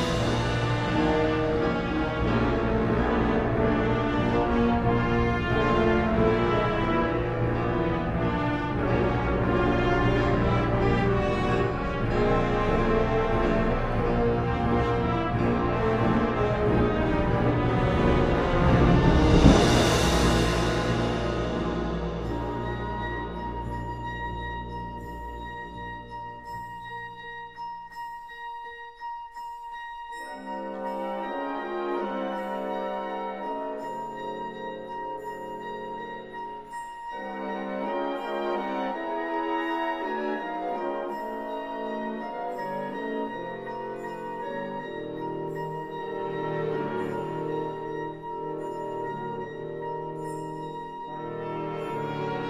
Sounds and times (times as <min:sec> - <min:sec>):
Orchestra: 0:00.0 - 0:28.7, 0:30.1 - 0:52.4.